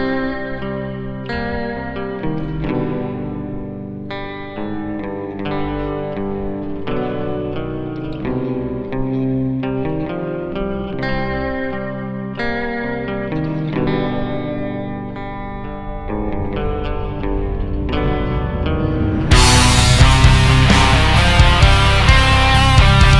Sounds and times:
Guitar: 0:00.0 - 0:23.1
Echo: 0:13.3 - 0:21.4.

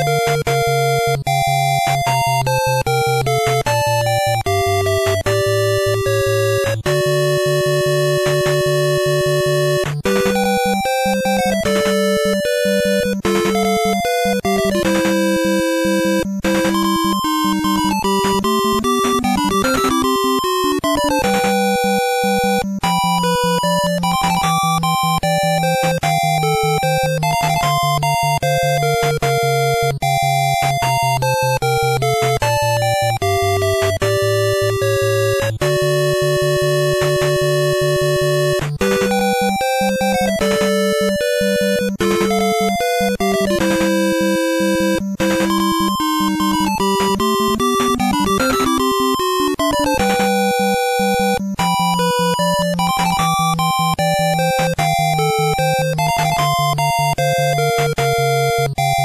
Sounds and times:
Video game music: 0:00.0 - 0:59.0.

